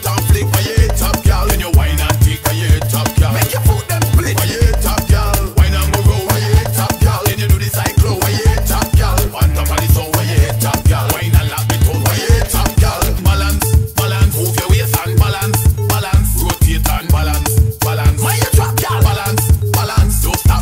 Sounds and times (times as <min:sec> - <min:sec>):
Funk: 0:00.0 - 0:20.6
House music: 0:00.0 - 0:20.6.